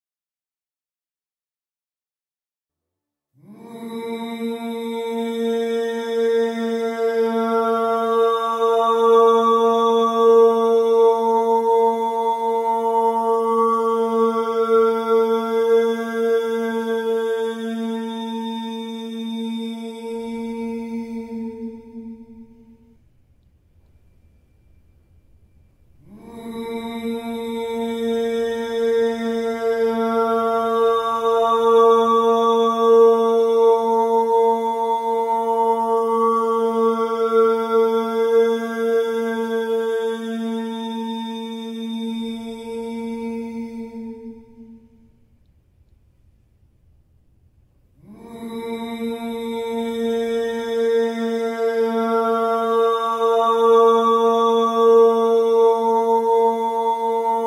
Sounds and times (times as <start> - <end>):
Music: 2.8 - 45.4.